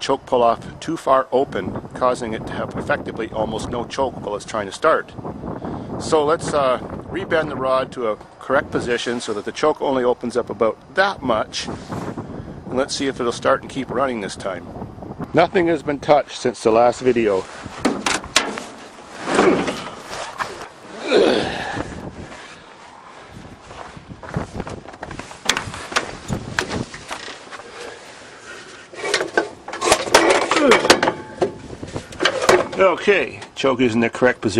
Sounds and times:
Speech: 0.0 - 5.2, 6.0 - 11.8, 12.7 - 14.6, 15.3 - 17.5, 32.6 - 34.5.

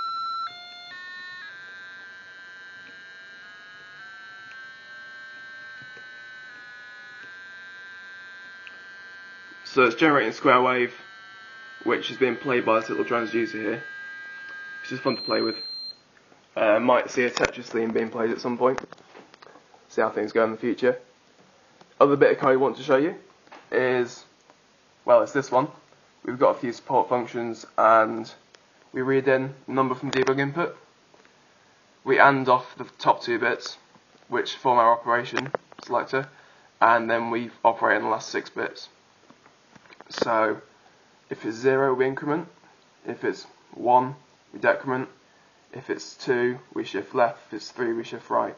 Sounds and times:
Speech: 9.7 - 11.0, 11.8 - 13.9, 14.9 - 15.6, 16.6 - 18.9, 19.9 - 21.1, 22.0 - 24.3, 25.1 - 28.4, 29.0 - 30.8, 32.1 - 39.0, 40.1 - 40.7, 41.3 - 48.5.

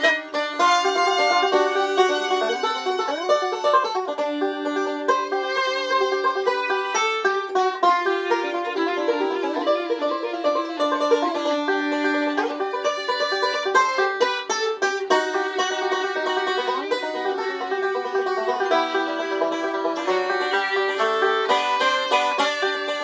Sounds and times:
Pizzicato: 0.0 - 23.0.

